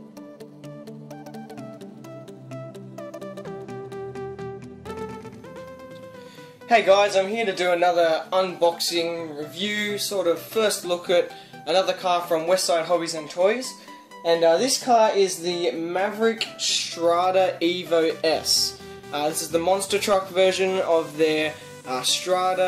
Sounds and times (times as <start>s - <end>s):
Music: 0.0s - 22.6s
Speech: 6.7s - 22.6s.